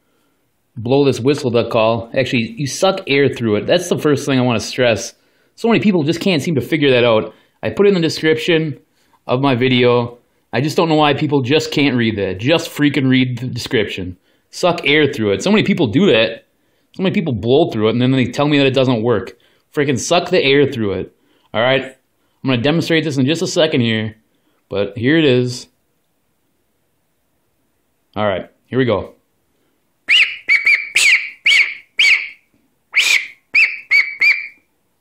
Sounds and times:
Speech: 0.8 - 25.8, 28.1 - 29.2
Quack: 33.0 - 34.6.

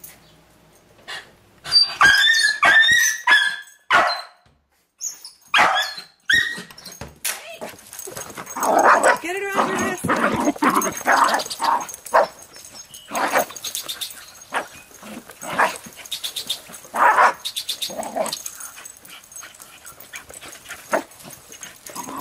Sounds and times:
Dog: 1.1 - 4.4, 5.5 - 6.7, 7.6 - 22.2
Canidae, dogs, wolves: 1.6 - 4.4, 5.0 - 7.0, 7.6 - 22.2
Speech: 9.1 - 10.3.

